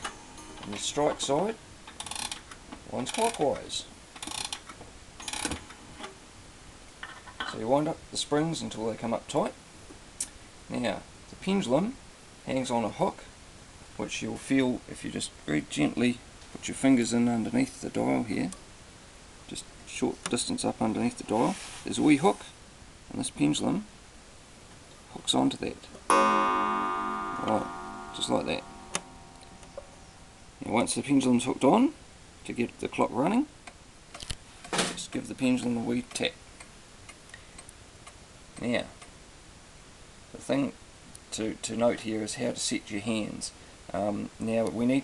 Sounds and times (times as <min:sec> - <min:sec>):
Speech: 0:00.6 - 0:01.6, 0:02.9 - 0:03.9, 0:07.4 - 0:09.6, 0:10.7 - 0:13.3, 0:14.0 - 0:18.6, 0:19.5 - 0:23.9, 0:25.1 - 0:25.9, 0:27.4 - 0:28.6, 0:30.6 - 0:33.6, 0:34.8 - 0:36.4, 0:38.6 - 0:39.0, 0:40.3 - 0:45.0.